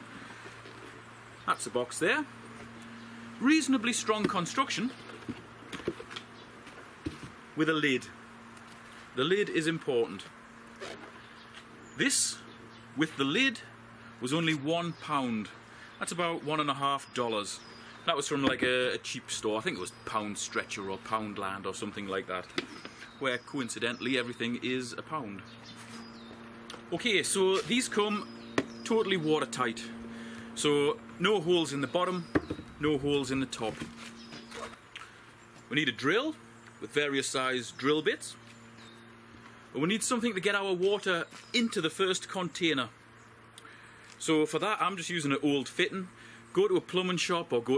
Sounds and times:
Speech: 1.5 - 2.3, 3.4 - 5.0, 7.6 - 8.2, 9.2 - 10.3, 12.0 - 12.4, 13.0 - 22.5, 23.2 - 25.4, 26.9 - 30.0, 30.6 - 33.9, 35.7 - 38.4, 39.8 - 43.0, 44.2 - 47.7.

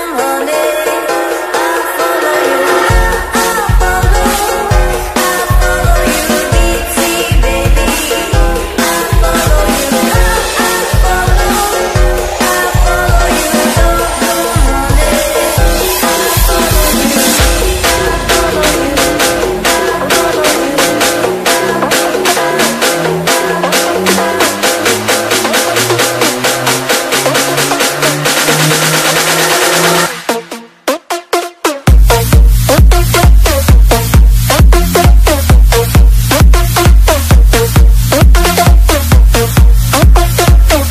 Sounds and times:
Techno: 0.0 - 40.9.

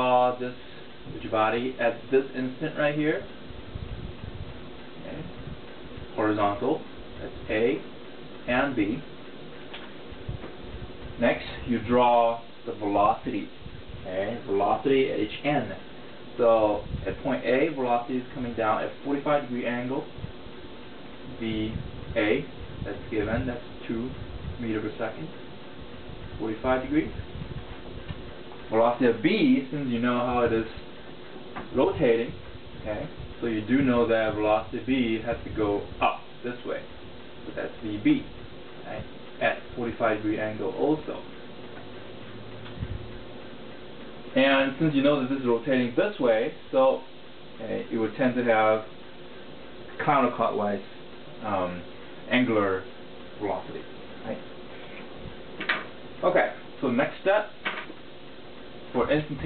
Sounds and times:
Speech: 0.0 - 3.3, 5.0 - 5.4, 6.1 - 7.9, 8.5 - 9.1, 11.2 - 20.2, 21.3 - 25.4, 26.4 - 27.2, 28.7 - 30.9, 31.7 - 36.9, 37.5 - 41.3, 44.4 - 49.0, 50.0 - 54.5, 56.2 - 57.6, 58.9 - 59.4
Inside, small room: 0.0 - 59.4.

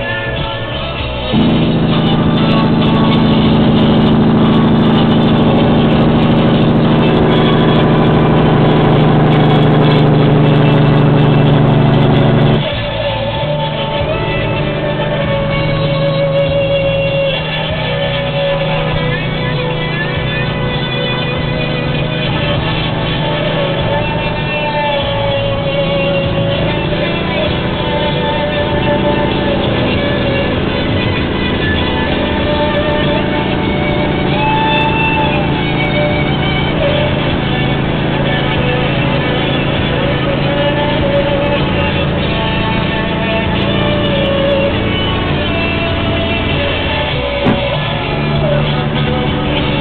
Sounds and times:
Music: 0.0 - 49.8.

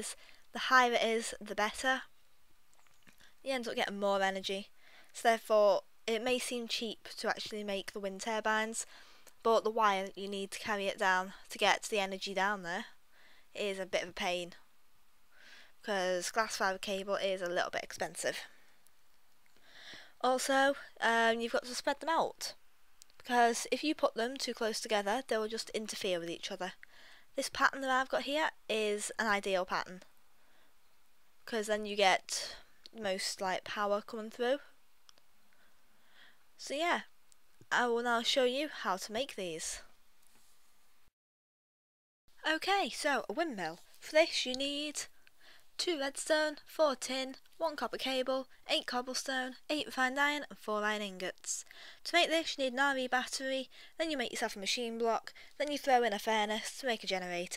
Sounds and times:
Speech: 0.0 - 2.1, 3.4 - 12.9, 13.6 - 14.6, 15.8 - 18.5, 20.2 - 22.6, 23.2 - 26.8, 27.4 - 30.1, 31.4 - 34.7, 36.6 - 37.1, 37.7 - 39.9, 42.4 - 45.1, 45.8 - 57.5.

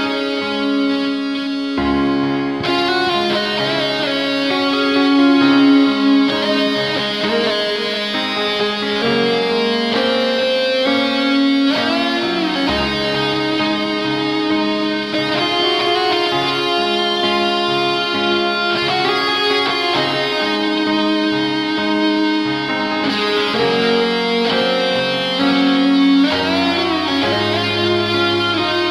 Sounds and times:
Bass guitar: 0.0 - 28.9
Strum: 0.0 - 28.9.

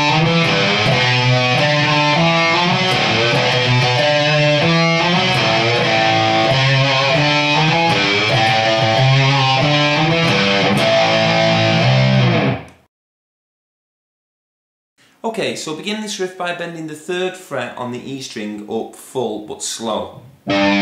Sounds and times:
Strum: 0.0 - 12.6
Speech: 15.2 - 20.3.

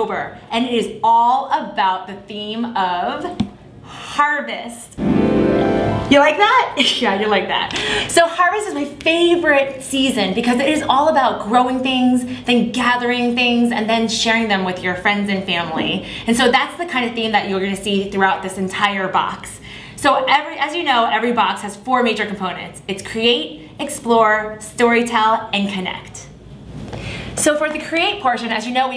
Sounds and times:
Speech: 0.0 - 5.0, 6.1 - 26.4, 27.4 - 28.9.

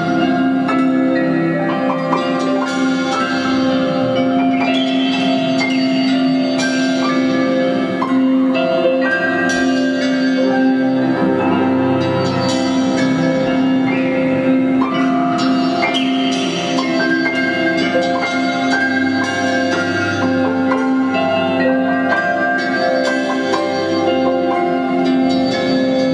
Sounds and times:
Music: 0.0 - 26.1.

